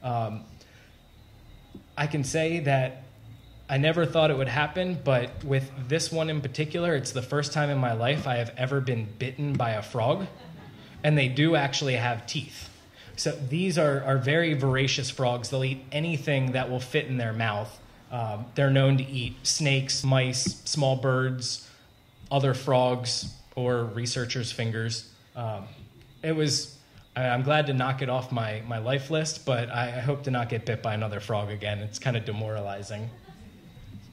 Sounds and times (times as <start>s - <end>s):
Speech: 0.0s - 0.5s, 2.0s - 3.0s, 3.7s - 10.4s, 11.0s - 21.6s, 22.3s - 33.6s.